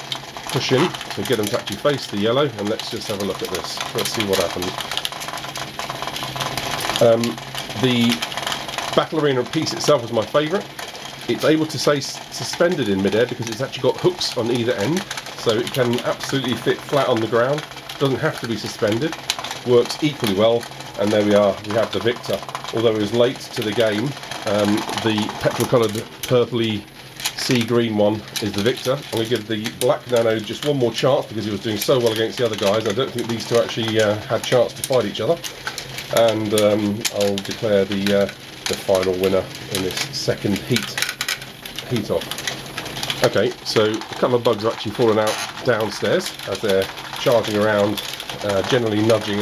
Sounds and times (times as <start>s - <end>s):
Inside, small room: 0.0s - 49.4s
Speech: 0.5s - 4.8s, 7.0s - 8.3s, 8.9s - 35.5s, 36.1s - 41.1s, 41.9s - 42.4s, 43.2s - 49.4s.